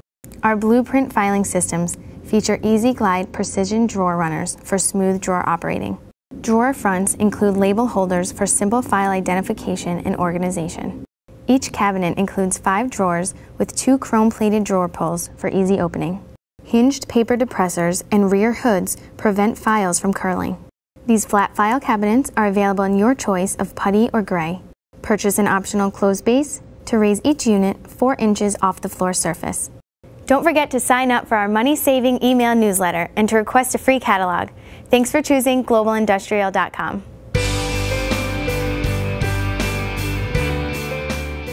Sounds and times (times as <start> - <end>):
Speech: 0.4 - 37.1.